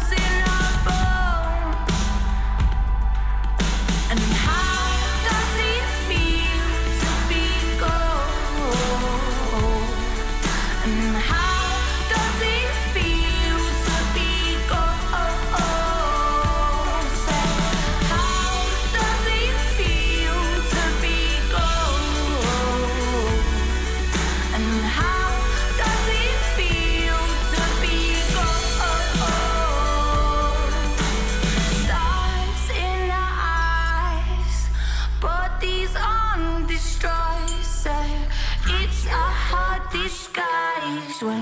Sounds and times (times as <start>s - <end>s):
Music of Asia: 0.0s - 34.5s.